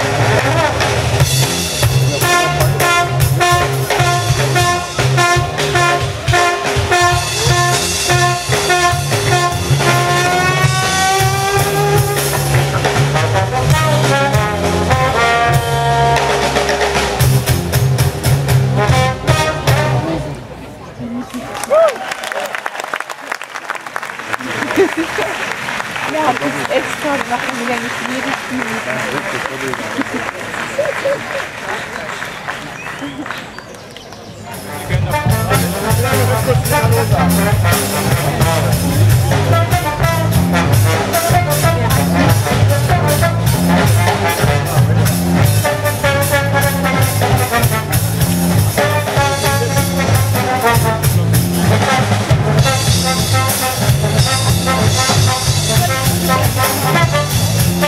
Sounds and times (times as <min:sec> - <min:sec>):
Music: 0:00.0 - 0:20.4, 0:34.6 - 0:57.8.